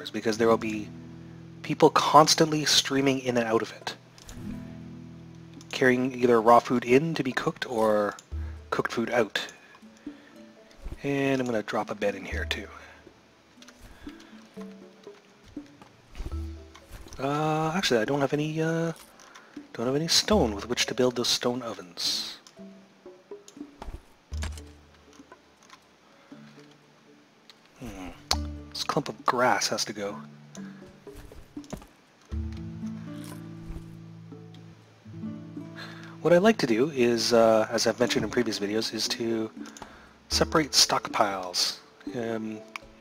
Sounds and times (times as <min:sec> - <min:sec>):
Speech: 0:00.0 - 0:00.9, 0:01.6 - 0:04.0, 0:05.7 - 0:09.6, 0:11.0 - 0:12.9, 0:17.2 - 0:19.0, 0:19.7 - 0:22.4, 0:27.8 - 0:28.2, 0:28.8 - 0:30.3, 0:36.2 - 0:39.6, 0:40.3 - 0:42.7
Music: 0:00.0 - 0:43.0.